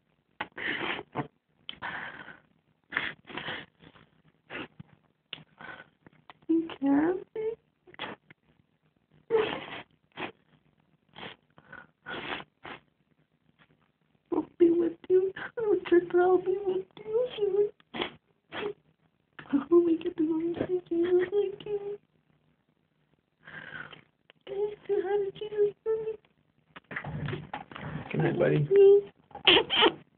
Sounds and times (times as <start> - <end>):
Inside, small room: 0.0 - 30.1
Speech: 6.5 - 7.6, 14.3 - 17.8, 19.4 - 22.0, 24.5 - 26.2, 28.0 - 29.1.